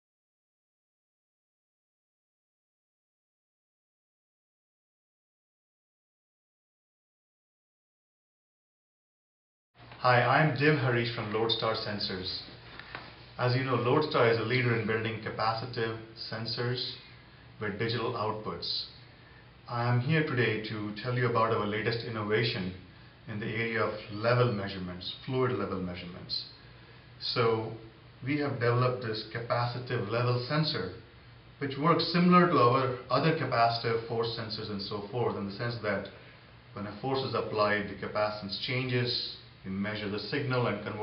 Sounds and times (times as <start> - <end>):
Speech: 10.0 - 12.6, 13.4 - 19.0, 19.7 - 26.6, 27.2 - 41.0.